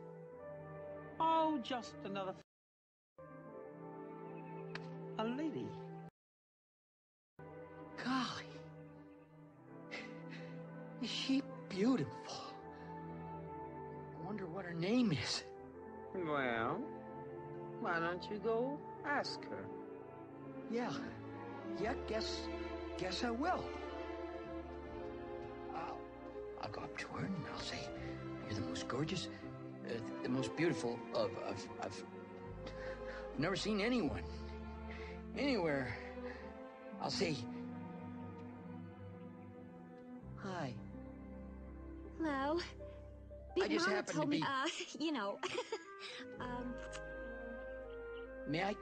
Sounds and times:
Music: 0.0 - 2.5, 3.2 - 6.2, 7.4 - 48.8.

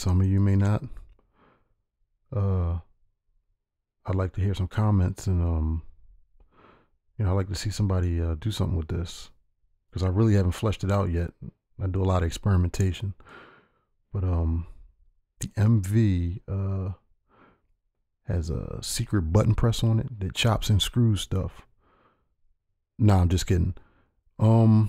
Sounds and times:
Speech: 0.0 - 1.0, 2.3 - 2.9, 4.1 - 6.0, 7.2 - 9.4, 10.0 - 13.2, 14.1 - 14.8, 15.4 - 17.1, 18.3 - 21.7, 23.0 - 23.8, 24.4 - 24.8.

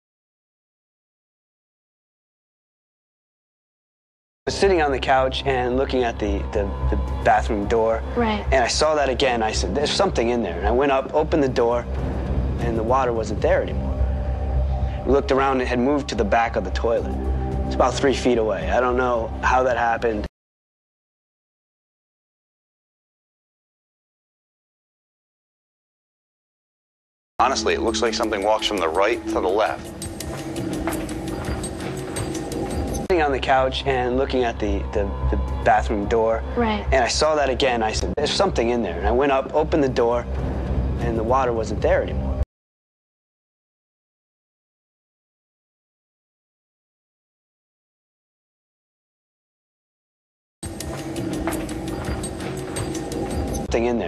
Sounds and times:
Speech: 4.5 - 11.9, 12.6 - 13.8, 15.1 - 17.1, 17.7 - 20.3, 27.4 - 29.8, 33.1 - 40.3, 41.0 - 42.2, 53.7 - 54.0
Music: 4.5 - 20.3, 27.4 - 42.4, 50.6 - 54.0.

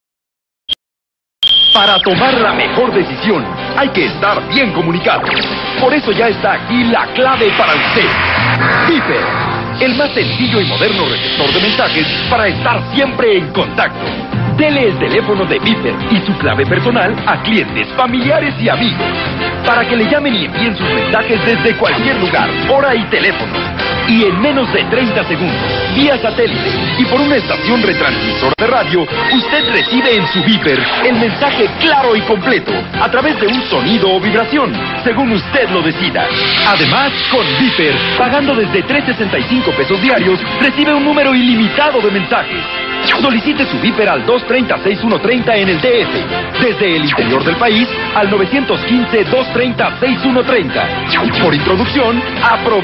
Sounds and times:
Speech: 1.8 - 8.2, 8.8 - 23.4, 24.0 - 52.8
Music: 1.8 - 52.8.

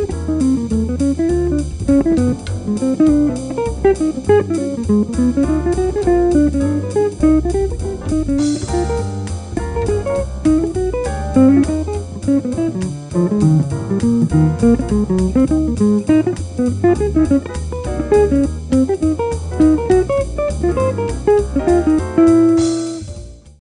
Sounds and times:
Electric guitar: 0.0 - 23.1
Strum: 0.0 - 23.6.

